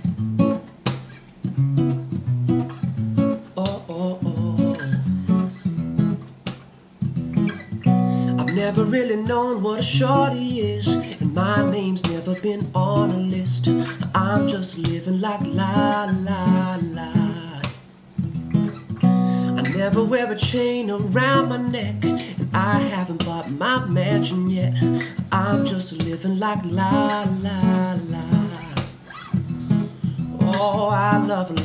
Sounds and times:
Music: 0.0s - 31.6s.

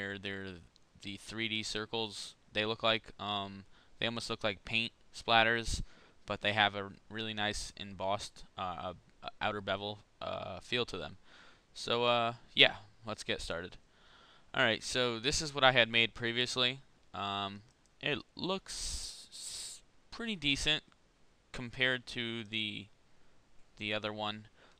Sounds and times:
Speech: 0.0s - 11.2s, 11.8s - 13.8s, 14.6s - 20.9s, 21.6s - 22.9s, 23.8s - 24.5s.

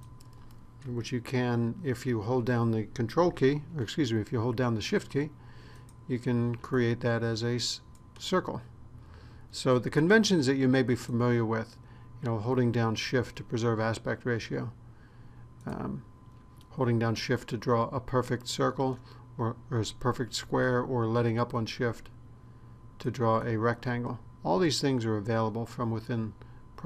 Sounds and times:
Speech: 0.8s - 5.4s, 6.1s - 8.7s, 9.5s - 14.8s, 15.6s - 16.1s, 16.7s - 22.2s, 23.0s - 26.8s.

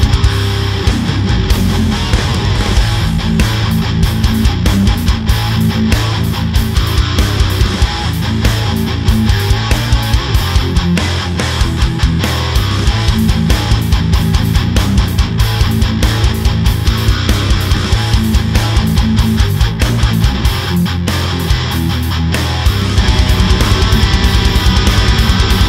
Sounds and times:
Electric guitar: 0.0s - 25.6s.

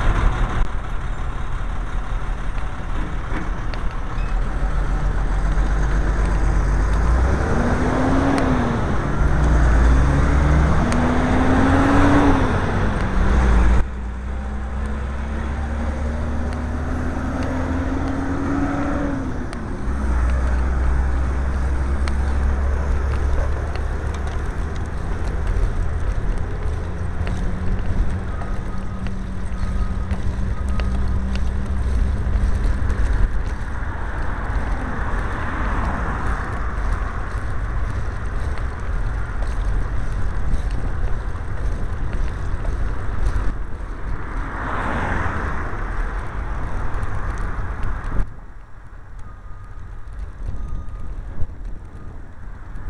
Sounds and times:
Bicycle: 0.0s - 52.9s
Outside, urban or manmade: 0.0s - 52.9s.

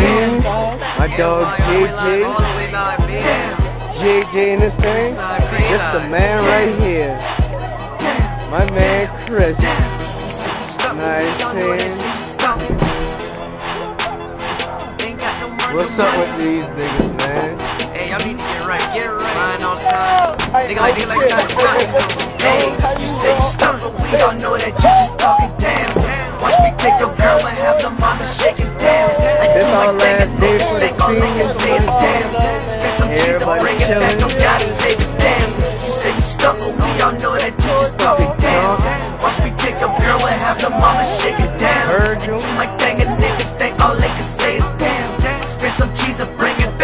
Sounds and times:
Music: 0.0s - 46.8s
Speech: 15.6s - 25.8s, 26.4s - 45.0s.

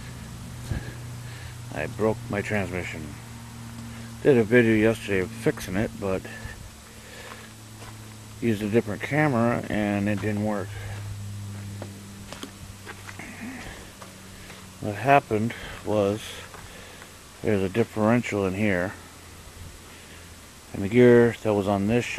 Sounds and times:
Speech: 1.7s - 3.2s, 4.2s - 6.6s, 8.4s - 11.0s, 14.8s - 16.5s, 17.4s - 19.0s, 20.7s - 22.1s.

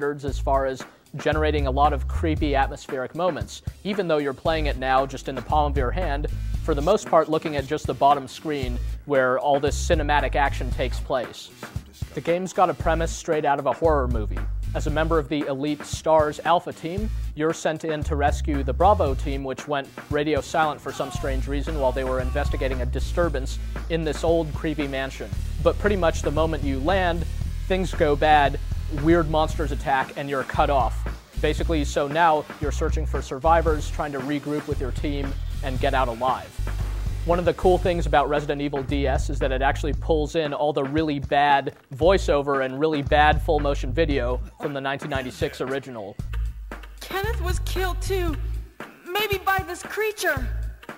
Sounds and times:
Speech: 0.0s - 11.5s, 12.1s - 36.5s, 37.2s - 46.2s, 47.0s - 48.4s, 49.1s - 50.6s
Music: 0.0s - 50.9s.

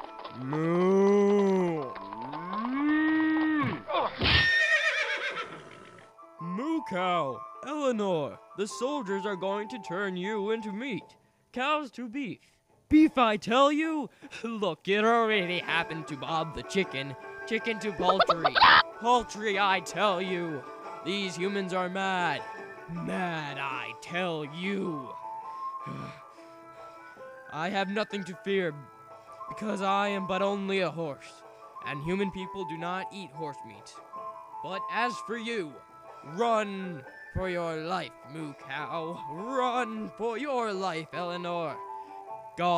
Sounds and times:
Music: 0.0s - 42.7s
Speech: 0.4s - 2.0s, 6.4s - 25.1s, 27.5s - 28.8s, 29.5s - 34.0s, 34.6s - 41.8s.

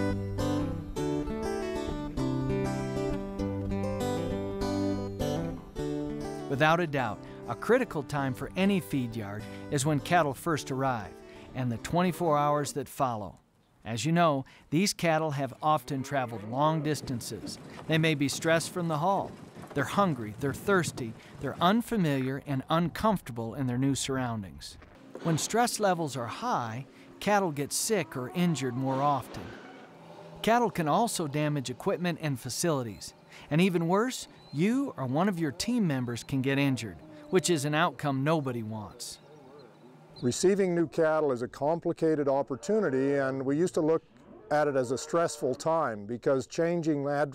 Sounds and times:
Speech: 6.5s - 29.6s, 30.4s - 39.2s, 40.2s - 47.3s.

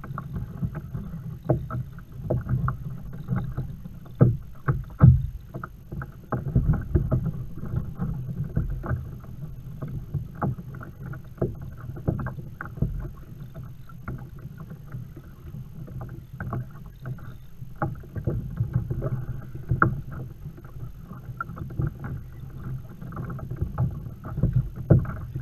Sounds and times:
Rowboat, canoe, kayak: 0.0s - 25.4s.

